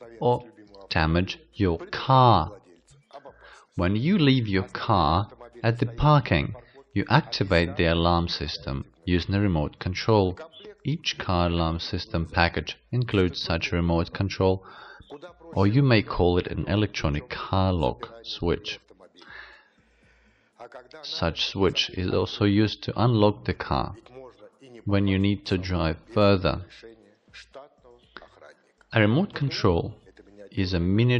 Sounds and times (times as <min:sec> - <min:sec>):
Speech: 0:00.0 - 0:19.5, 0:20.6 - 0:31.1.